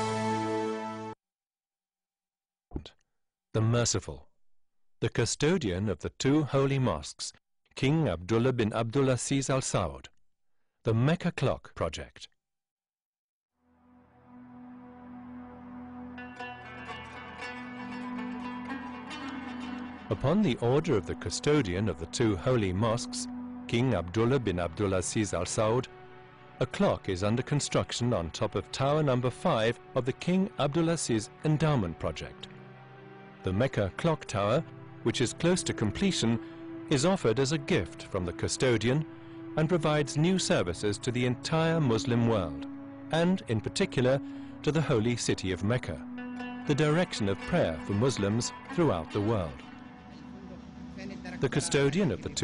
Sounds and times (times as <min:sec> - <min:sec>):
Music: 0:00.0 - 0:01.2, 0:13.6 - 0:52.4
Speech: 0:02.8 - 0:04.3, 0:05.0 - 0:10.1, 0:10.9 - 0:12.4, 0:20.1 - 0:25.9, 0:26.6 - 0:32.5, 0:33.5 - 0:39.0, 0:39.6 - 0:46.0, 0:46.7 - 0:49.6, 0:50.2 - 0:52.4.